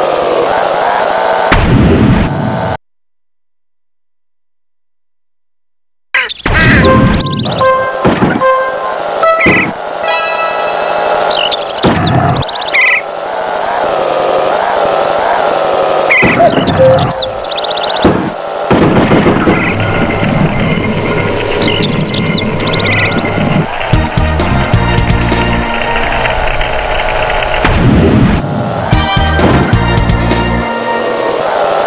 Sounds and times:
Music: 6.8 - 11.4, 22.8 - 26.6, 28.9 - 31.8.

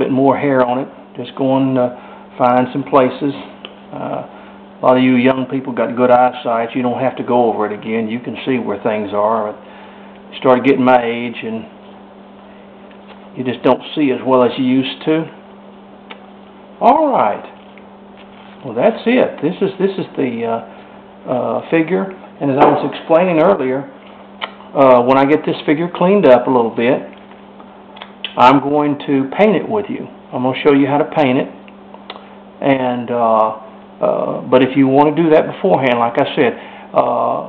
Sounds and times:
Speech: 0.0 - 9.6, 10.3 - 11.8, 13.4 - 15.4, 16.8 - 17.6, 18.6 - 20.7, 21.3 - 24.0, 24.7 - 27.1, 28.3 - 31.6, 32.6 - 37.4.

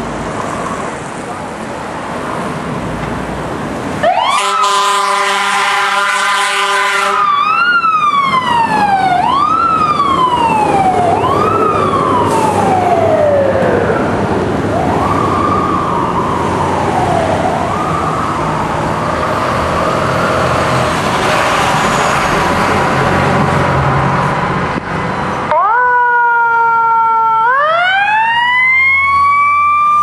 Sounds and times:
Car: 0.0 - 4.2, 18.0 - 25.7
Accelerating, revving, vroom: 18.9 - 24.8.

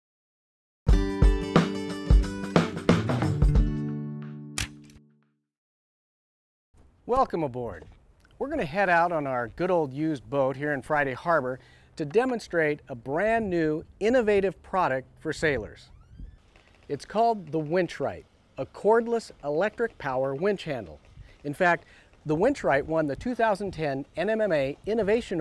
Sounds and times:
Music: 0.9 - 5.4
Speech: 7.1 - 15.9, 16.9 - 25.4.

